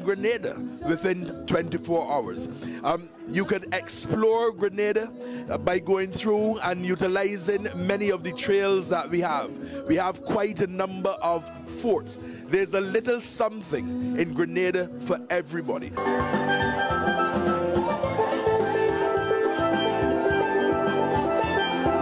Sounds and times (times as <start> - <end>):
Speech: 0.0 - 16.0.